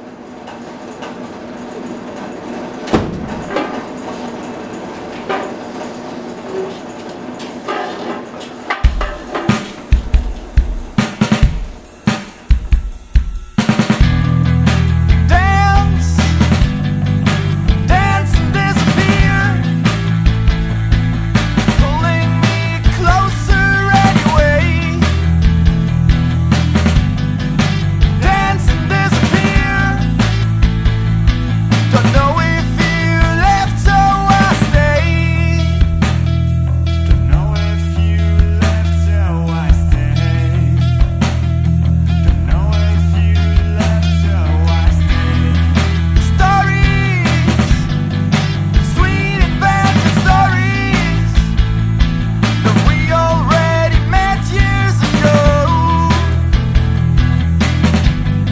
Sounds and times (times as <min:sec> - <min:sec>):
Dance music: 0:08.8 - 0:36.0, 0:42.2 - 0:58.5.